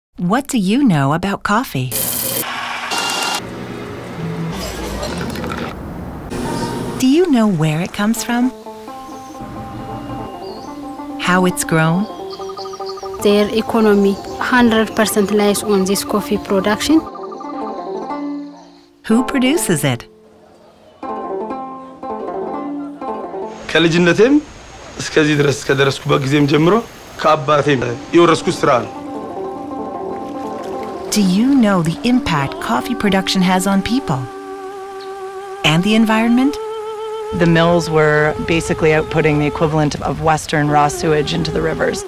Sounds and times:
Speech: 0.2s - 2.0s, 13.2s - 17.1s, 19.1s - 20.1s, 31.1s - 34.3s, 35.7s - 36.6s, 37.4s - 42.0s
Music: 6.3s - 24.2s, 27.2s - 42.0s
Stream: 23.5s - 35.4s.

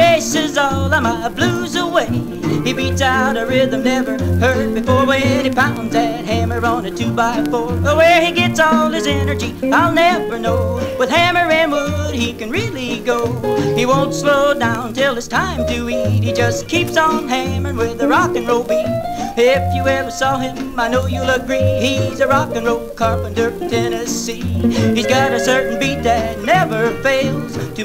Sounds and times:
Rock and roll: 0.0s - 27.8s.

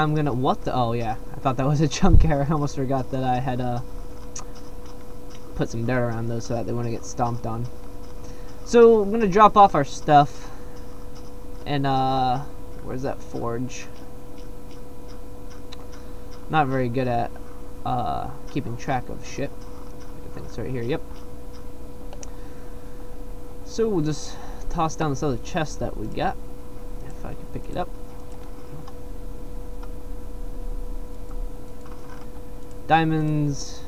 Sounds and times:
Speech: 0.0s - 3.8s, 5.6s - 7.7s, 8.7s - 10.5s, 11.7s - 14.0s, 16.5s - 17.3s, 17.9s - 19.5s, 20.2s - 21.0s, 23.7s - 26.4s, 27.1s - 27.9s, 32.9s - 33.8s.

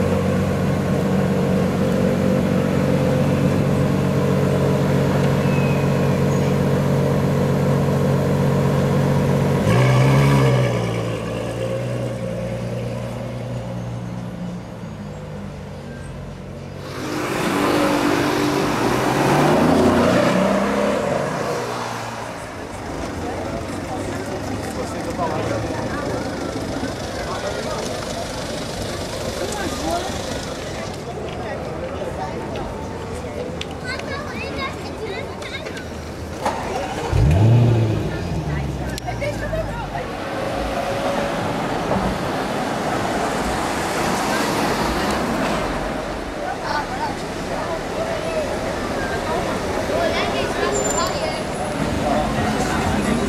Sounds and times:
Race car, auto racing: 0.0s - 34.0s, 35.6s - 53.2s.

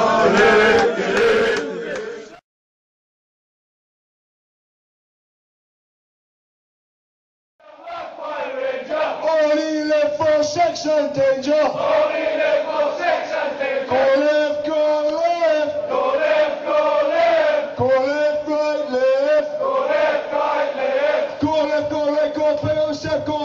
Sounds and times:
Battle cry: 0.0s - 2.4s, 7.6s - 9.8s, 11.6s - 14.7s, 15.4s - 18.0s, 19.0s - 21.6s
Crowd: 0.0s - 2.4s, 7.6s - 23.4s.

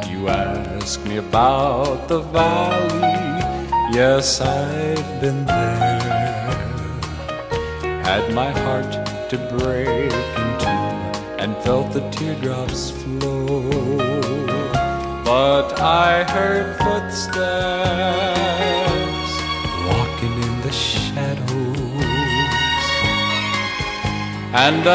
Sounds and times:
Music: 0.0s - 24.9s.

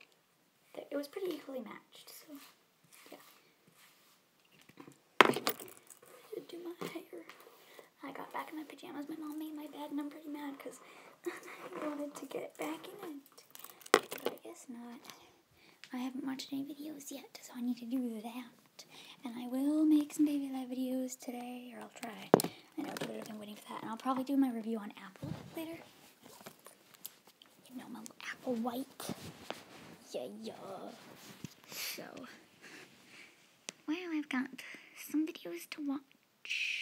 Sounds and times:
Speech: 0.7s - 3.2s, 6.3s - 7.3s, 8.0s - 13.5s, 14.2s - 15.3s, 15.9s - 18.6s, 19.2s - 25.8s, 27.6s - 29.2s, 30.0s - 31.0s, 31.9s - 32.4s, 33.9s - 36.8s.

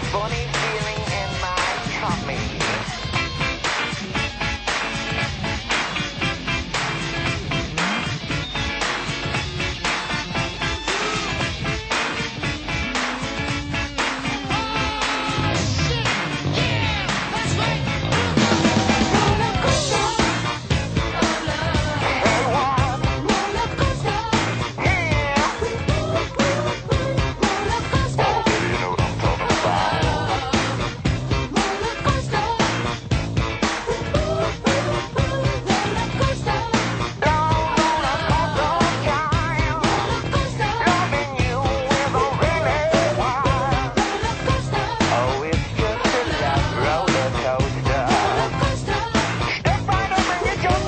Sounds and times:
Music: 0.0s - 50.8s.

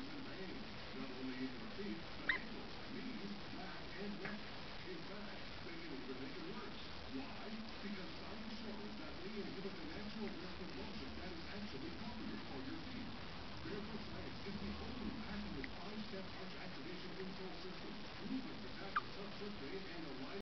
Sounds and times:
Speech: 0.0s - 20.4s.

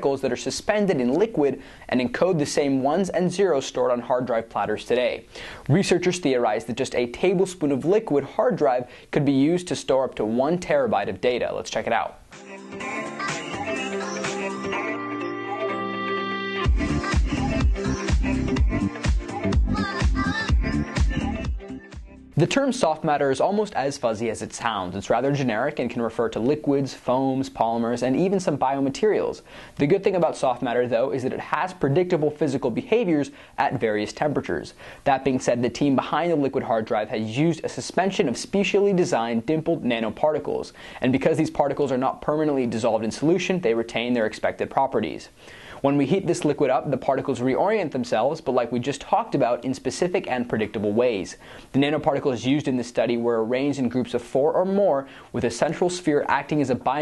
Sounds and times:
Speech: 0.0s - 12.2s, 22.4s - 57.0s
Music: 12.3s - 22.5s.

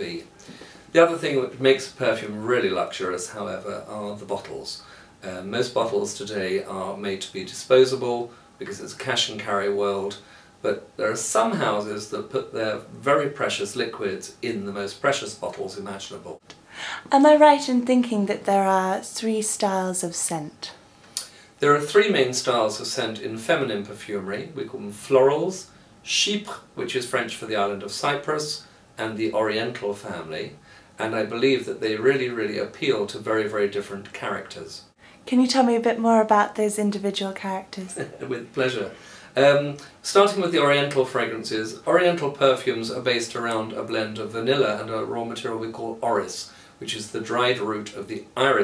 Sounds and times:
Speech: 0.0s - 0.3s, 0.9s - 16.4s, 17.0s - 20.8s, 21.6s - 48.6s.

